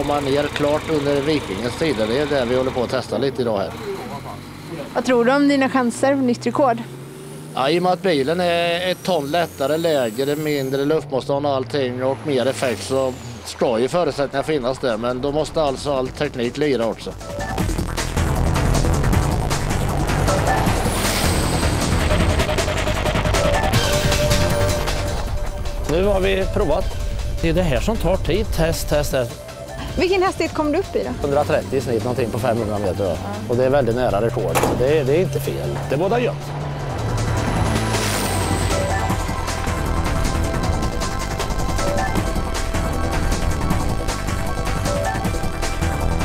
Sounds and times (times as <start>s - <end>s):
Truck: 0.0s - 46.2s
Music: 14.3s - 46.2s.